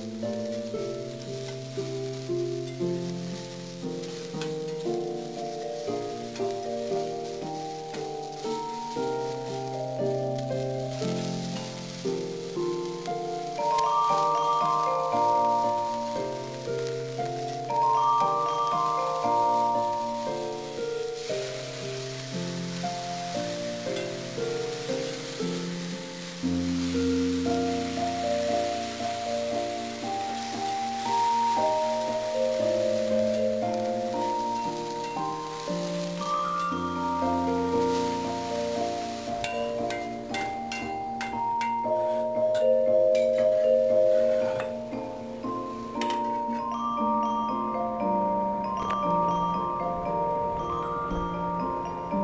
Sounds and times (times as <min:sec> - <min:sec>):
Music: 0:00.0 - 0:52.2.